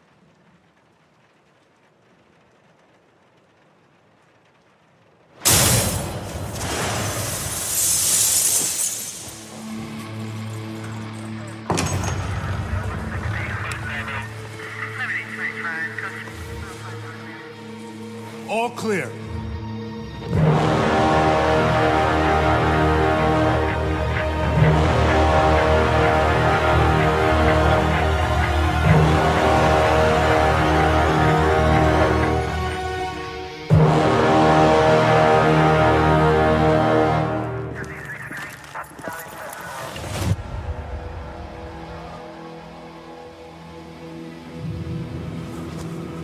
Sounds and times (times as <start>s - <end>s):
Music: 9.1s - 39.6s, 40.2s - 46.2s.